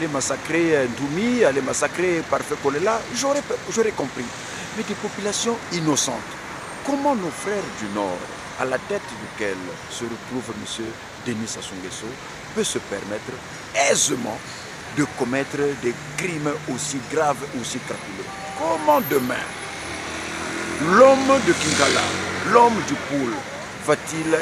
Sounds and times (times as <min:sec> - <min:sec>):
Speech: 0:00.0 - 0:19.5, 0:20.8 - 0:24.4.